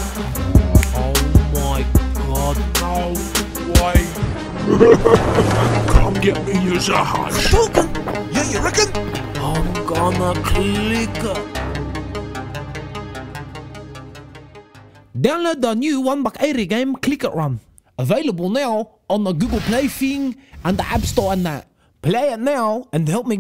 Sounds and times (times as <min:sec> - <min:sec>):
Music: 0:00.0 - 0:15.4
Speech: 0:00.6 - 0:04.2, 0:05.9 - 0:11.5, 0:15.2 - 0:23.4.